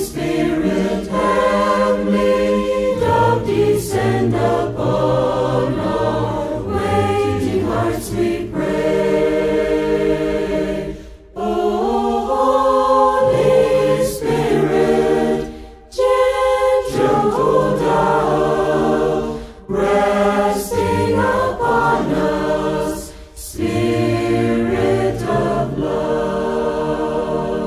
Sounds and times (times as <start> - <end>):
A capella: 0.0 - 27.6.